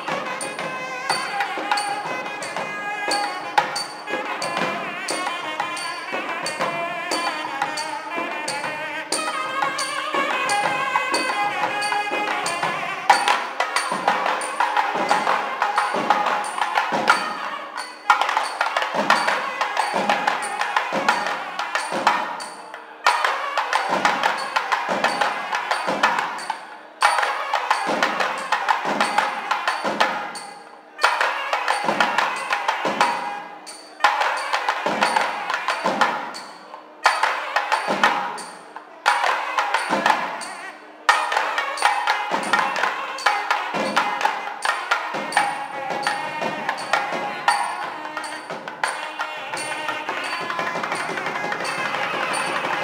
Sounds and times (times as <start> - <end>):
Carnatic music: 0.0 - 52.8.